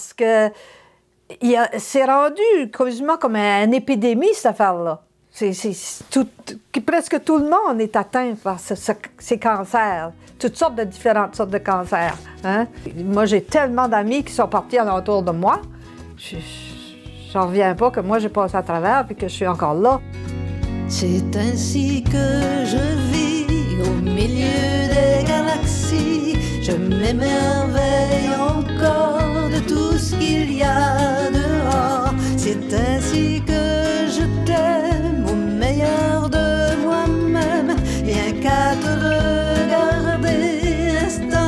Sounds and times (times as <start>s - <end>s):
Speech: 0.0s - 0.6s, 1.3s - 20.0s
Music: 8.6s - 41.4s.